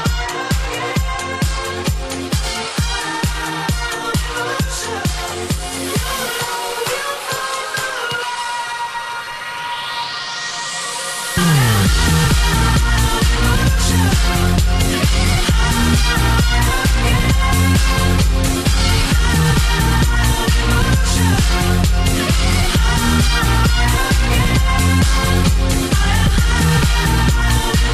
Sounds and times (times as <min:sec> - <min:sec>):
Electronic dance music: 0:00.0 - 0:27.9
Singing: 0:00.0 - 0:27.9.